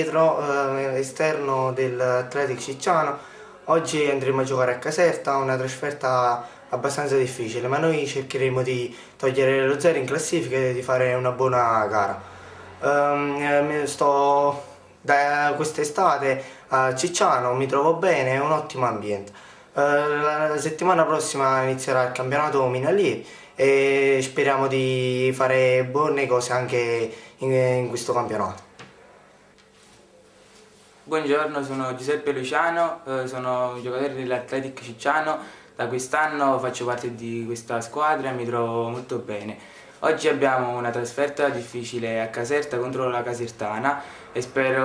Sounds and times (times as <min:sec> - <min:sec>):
Speech: 0:00.0 - 0:12.2, 0:12.8 - 0:28.7, 0:31.1 - 0:44.8.